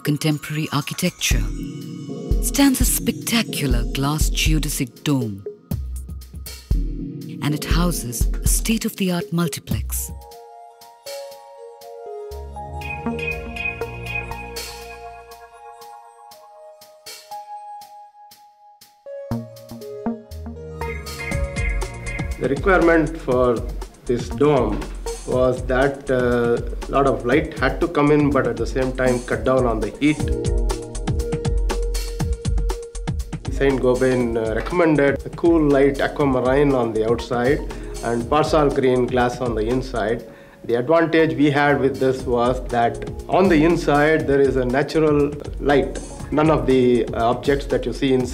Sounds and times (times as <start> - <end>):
Music: 0.0 - 48.3.